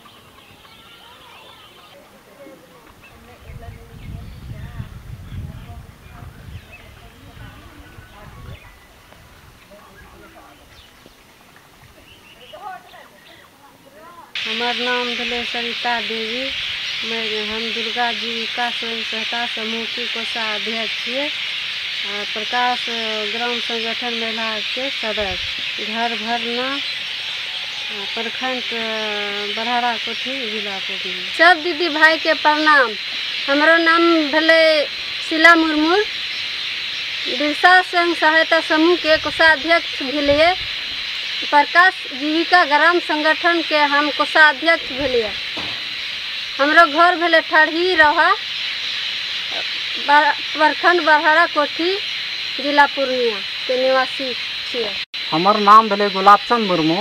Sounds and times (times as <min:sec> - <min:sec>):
Chirp, tweet: 0:03.0 - 0:09.0, 0:09.8 - 0:11.3, 0:12.0 - 0:13.5.